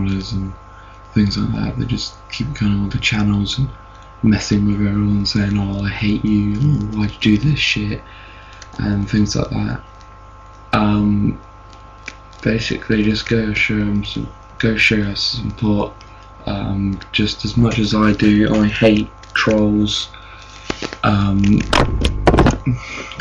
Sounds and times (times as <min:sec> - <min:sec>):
Speech: 0:00.0 - 0:00.6, 0:01.2 - 0:09.9, 0:10.8 - 0:11.5, 0:12.4 - 0:23.2.